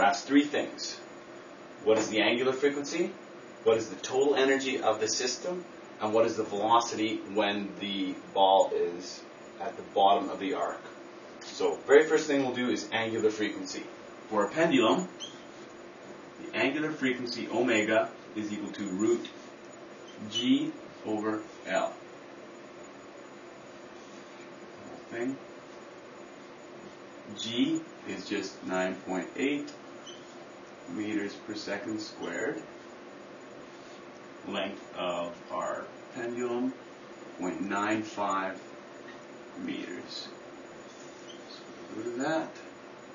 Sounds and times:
Speech: 0:00.0 - 0:01.1, 0:01.8 - 0:15.1, 0:16.4 - 0:19.4, 0:20.2 - 0:22.0, 0:25.1 - 0:25.4, 0:27.3 - 0:29.8, 0:30.9 - 0:32.7, 0:34.5 - 0:36.8, 0:37.4 - 0:38.7, 0:39.6 - 0:40.4, 0:41.9 - 0:42.7.

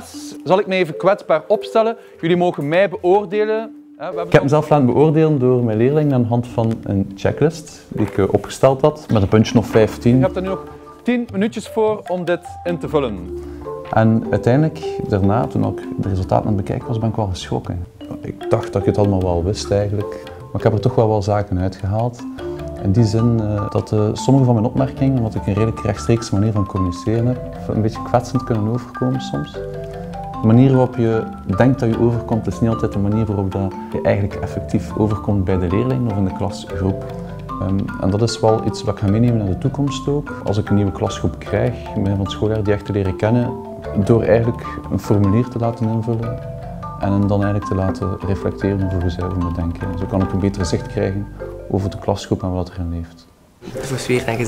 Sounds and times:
Speech: 0:00.0 - 0:13.3, 0:13.9 - 0:29.6, 0:30.4 - 0:37.0, 0:37.6 - 0:46.3, 0:47.0 - 0:54.4
Music: 0:00.0 - 0:54.4.

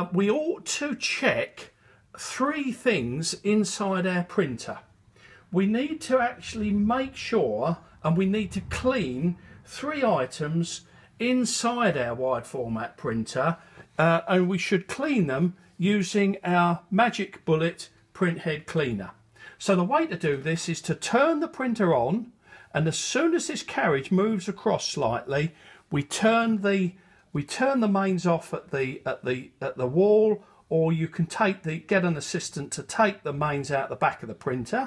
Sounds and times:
Speech: 0:00.0 - 0:04.9, 0:05.5 - 0:34.8.

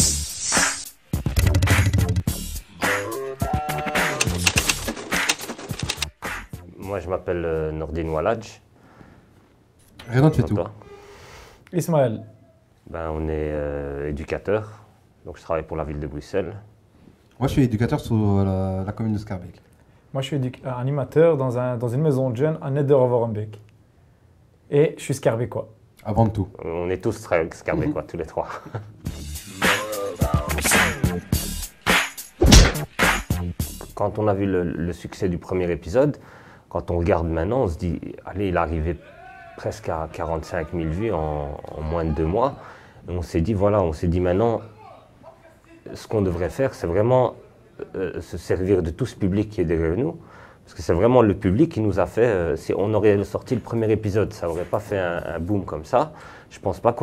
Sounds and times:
Speech: 0:06.7 - 0:08.6, 0:10.0 - 0:10.8, 0:11.7 - 0:16.7, 0:17.4 - 0:23.6, 0:24.7 - 0:28.6, 0:34.0 - 0:57.0.

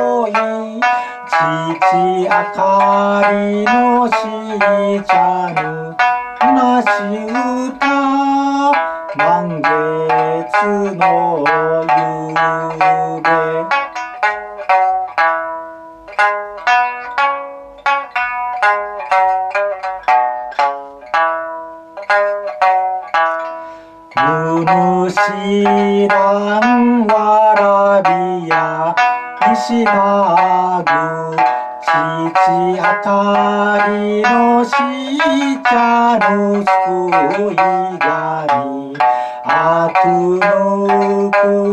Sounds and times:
Banjo: 0:00.0 - 0:41.7
Inside, small room: 0:00.0 - 0:41.7.

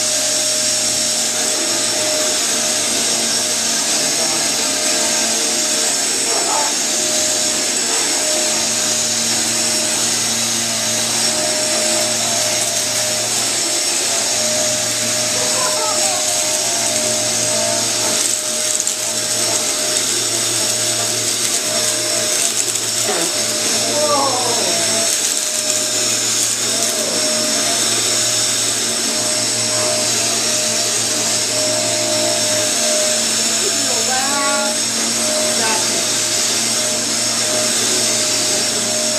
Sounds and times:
Vacuum cleaner: 0:00.0 - 0:39.1.

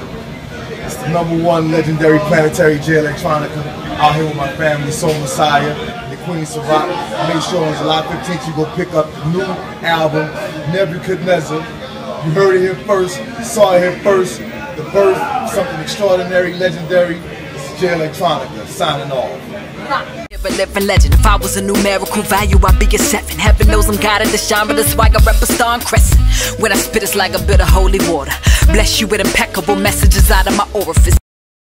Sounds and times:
Electronica: 0:20.3 - 0:31.2.

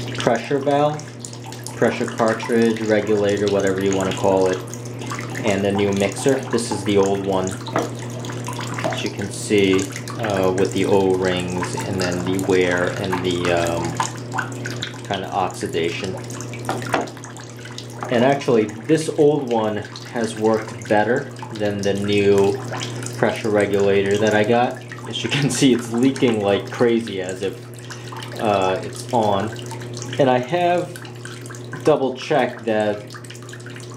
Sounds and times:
Bathtub (filling or washing): 0:00.0 - 0:33.9
Sink (filling or washing): 0:00.0 - 0:33.9
Water: 0:00.0 - 0:33.9
Water tap, faucet: 0:00.0 - 0:33.9.

